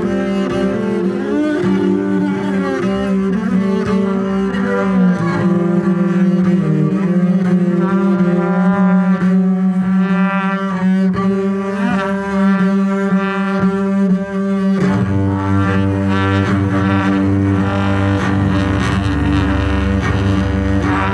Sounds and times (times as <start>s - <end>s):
Cello: 0.0s - 21.1s
Double bass: 0.0s - 21.1s.